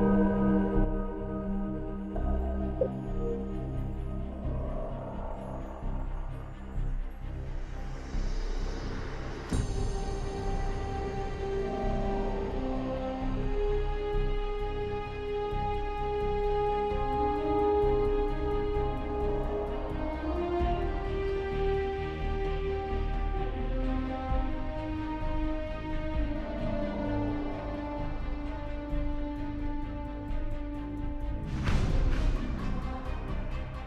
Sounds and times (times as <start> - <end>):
Music: 0.0 - 33.8.